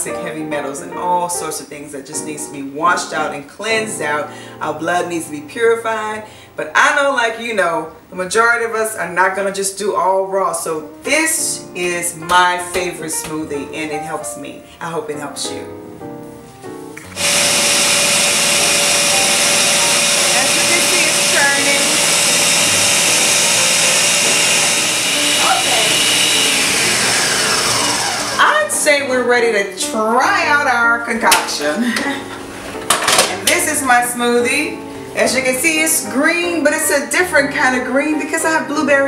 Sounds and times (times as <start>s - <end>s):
Speech: 0.0s - 15.7s, 28.4s - 31.8s, 33.4s - 39.0s
Music: 0.0s - 39.0s.